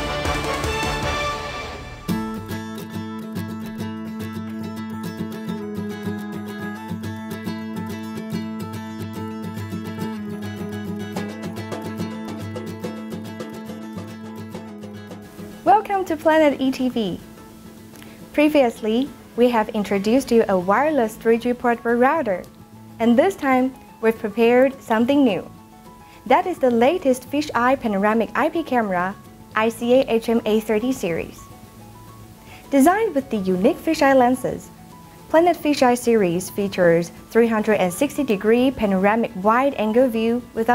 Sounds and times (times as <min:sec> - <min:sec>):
Music: 0:00.0 - 0:40.7
Speech: 0:15.6 - 0:17.2, 0:18.4 - 0:25.5, 0:26.3 - 0:31.4, 0:32.7 - 0:34.7, 0:35.3 - 0:40.7.